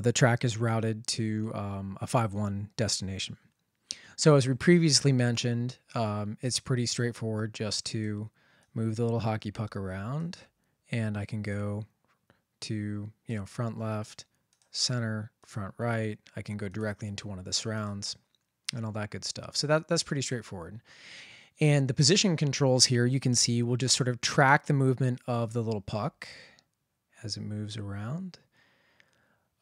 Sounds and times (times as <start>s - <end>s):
Speech: 0.0s - 3.4s, 4.2s - 11.9s, 12.6s - 20.8s, 21.6s - 26.5s, 27.2s - 28.4s.